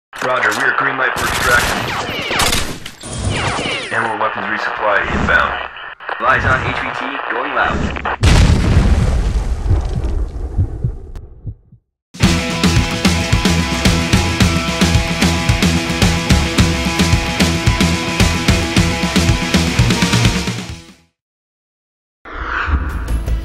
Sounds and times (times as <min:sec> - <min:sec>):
Speech: 0:00.2 - 0:01.8, 0:03.9 - 0:07.8
Boom: 0:08.2 - 0:11.4.